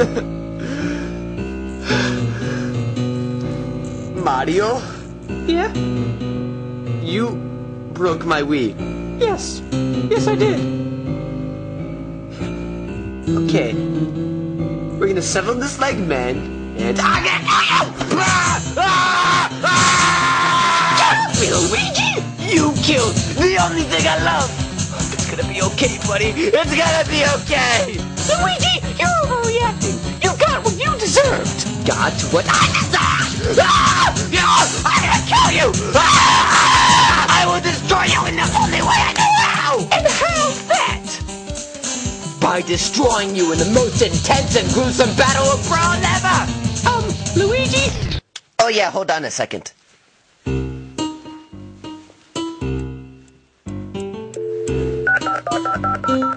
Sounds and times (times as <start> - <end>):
Music: 0.0 - 48.2, 50.4 - 56.3.